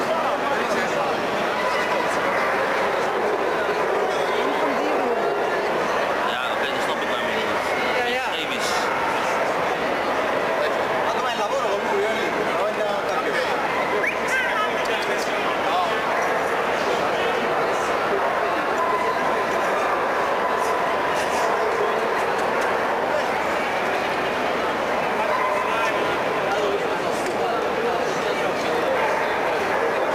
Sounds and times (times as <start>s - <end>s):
Speech: 0.0s - 30.1s.